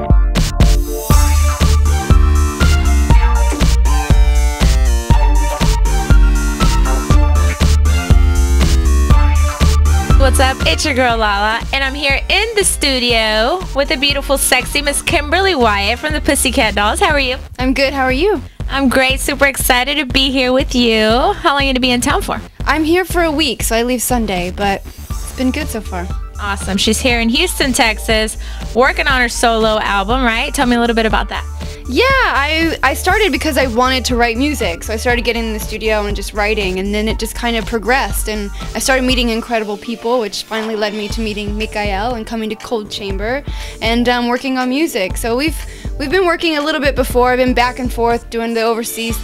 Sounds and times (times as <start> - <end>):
Music: 0.0 - 49.2
Speech: 10.2 - 49.2.